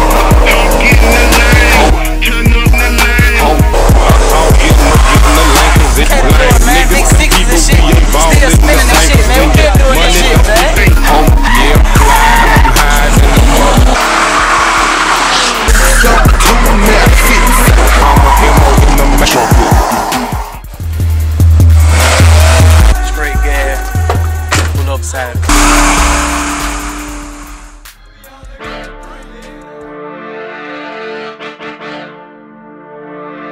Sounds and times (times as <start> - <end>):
Hip hop music: 0.0 - 30.7
Skidding: 10.6 - 23.0.